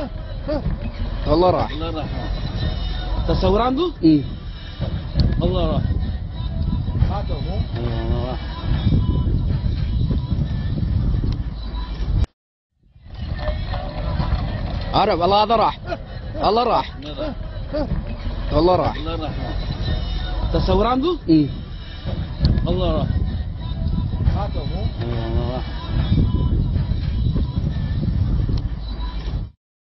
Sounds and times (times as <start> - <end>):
Speech: 7.0 - 8.4, 18.5 - 19.6, 20.5 - 21.6, 24.3 - 25.7.